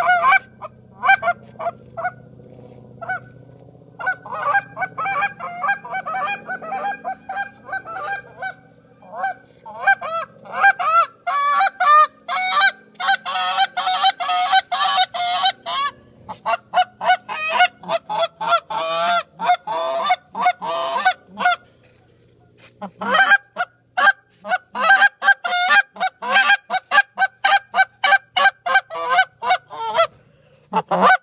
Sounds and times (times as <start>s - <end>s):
Honk: 0.0s - 3.4s, 4.0s - 22.0s, 22.8s - 31.2s.